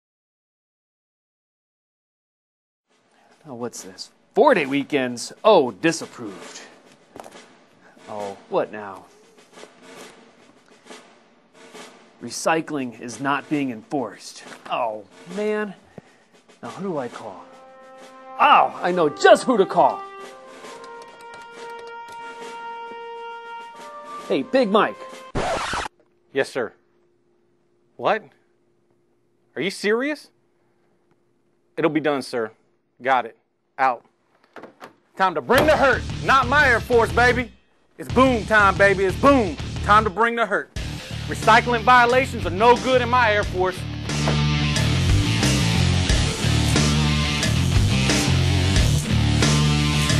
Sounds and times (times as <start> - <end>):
Speech: 3.4 - 6.8, 8.0 - 9.1, 12.2 - 15.8, 16.6 - 17.4, 18.4 - 20.0, 24.3 - 25.0, 26.3 - 26.8, 28.0 - 28.3, 29.6 - 30.3, 31.8 - 34.1, 35.2 - 40.7, 41.3 - 43.8
Music: 5.9 - 25.4, 35.5 - 50.1.